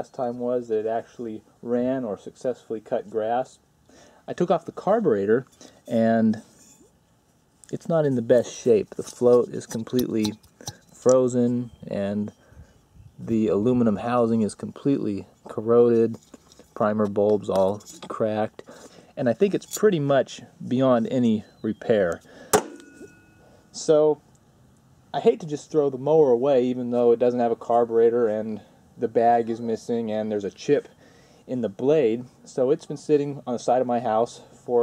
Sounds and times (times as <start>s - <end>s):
Speech: 0.0s - 3.6s, 4.3s - 6.5s, 7.7s - 10.4s, 11.0s - 12.3s, 13.2s - 16.2s, 16.8s - 22.2s, 23.7s - 24.2s, 25.2s - 30.9s, 31.5s - 34.8s.